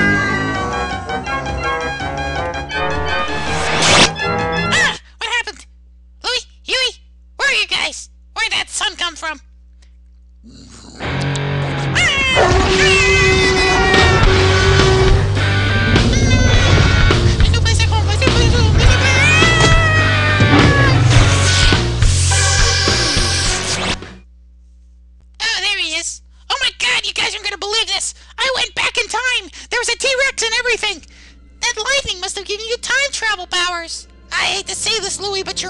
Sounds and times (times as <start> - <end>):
Music: 0.0 - 5.0, 11.0 - 12.0, 12.6 - 24.2
Speech: 4.7 - 9.5, 17.4 - 19.6, 25.4 - 35.6.